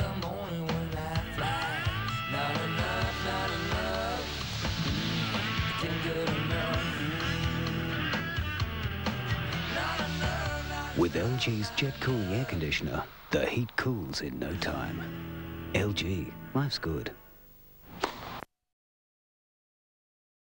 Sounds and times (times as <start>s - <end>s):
Television: 0.0s - 7.6s, 8.7s - 18.4s
Music: 0.0s - 13.1s, 14.3s - 17.4s
Speech: 11.0s - 15.1s, 15.7s - 17.2s.